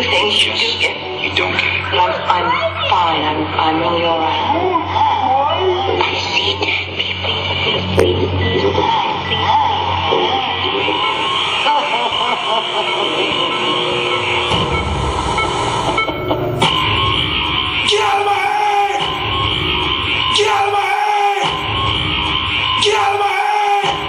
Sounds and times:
Music: 0.0 - 24.0
Pulse: 10.8 - 20.8.

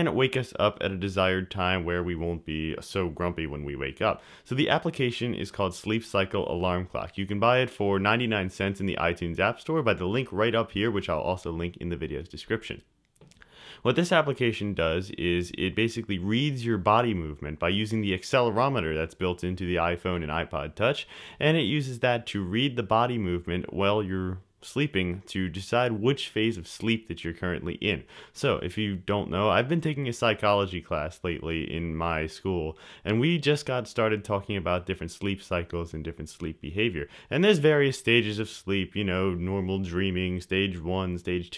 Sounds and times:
Speech: 0.0 - 12.9, 13.8 - 41.5.

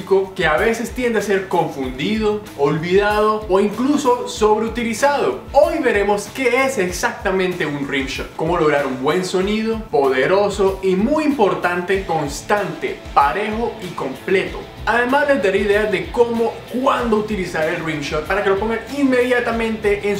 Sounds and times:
Speech: 0.0 - 20.1.

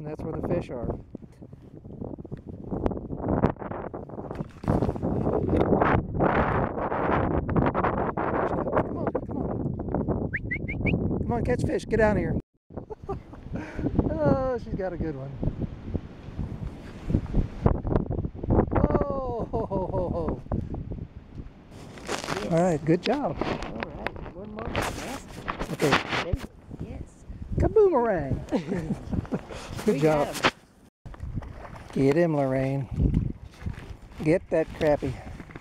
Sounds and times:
Rustling leaves: 21.5 - 27.2.

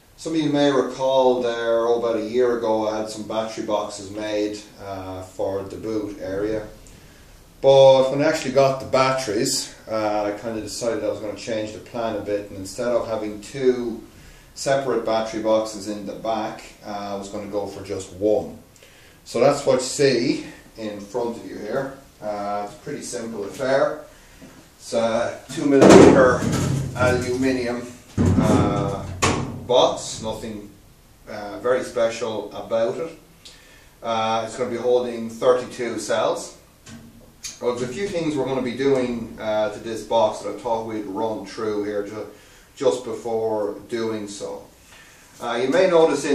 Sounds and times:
Speech: 0.2 - 6.8, 7.6 - 18.7, 19.3 - 24.1, 24.8 - 33.3, 34.0 - 36.7, 37.5 - 44.7, 45.4 - 46.3.

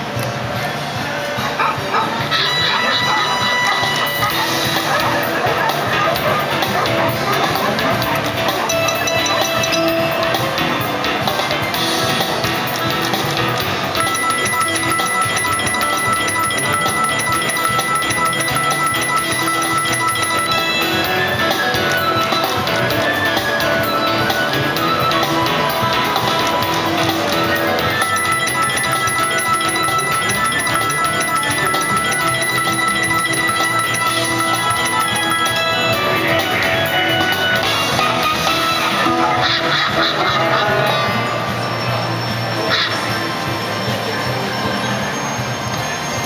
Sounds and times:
Music: 0.0 - 46.2.

